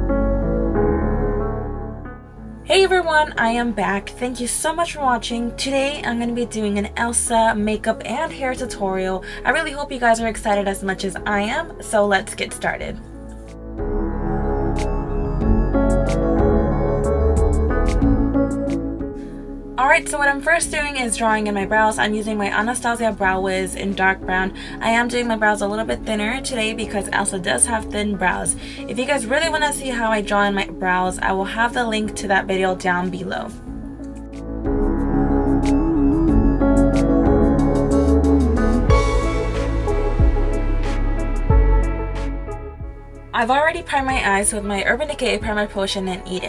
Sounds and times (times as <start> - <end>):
Ambient music: 0.0 - 46.4.